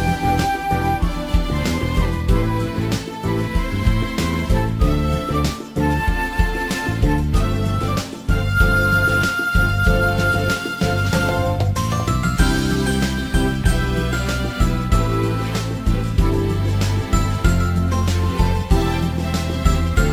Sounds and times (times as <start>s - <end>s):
Background music: 0.0s - 20.1s.